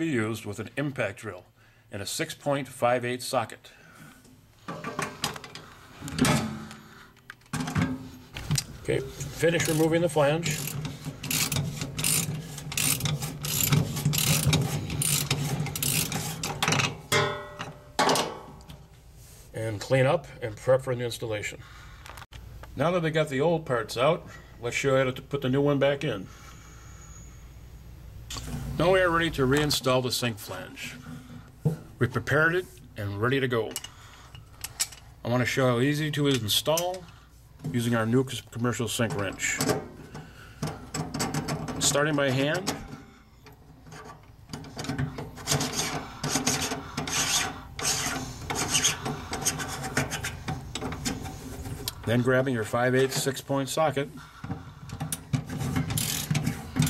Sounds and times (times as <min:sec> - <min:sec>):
Speech: 0:00.0 - 0:03.7, 0:08.8 - 0:10.6, 0:19.5 - 0:21.6, 0:22.8 - 0:26.3, 0:28.8 - 0:31.0, 0:32.0 - 0:33.8, 0:35.2 - 0:37.1, 0:37.7 - 0:39.7, 0:41.8 - 0:42.8, 0:52.1 - 0:54.2.